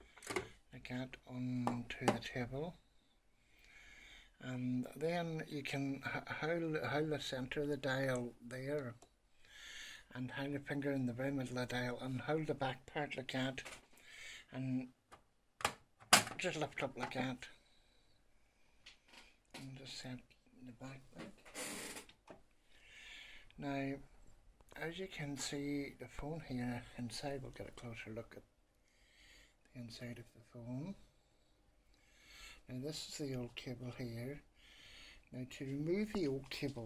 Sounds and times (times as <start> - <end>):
Speech: 0.7 - 2.8, 4.4 - 9.0, 10.1 - 13.7, 14.5 - 15.0, 16.3 - 17.6, 19.6 - 21.4, 23.6 - 24.1, 24.7 - 28.5, 29.7 - 31.1, 32.7 - 34.4, 35.3 - 36.8.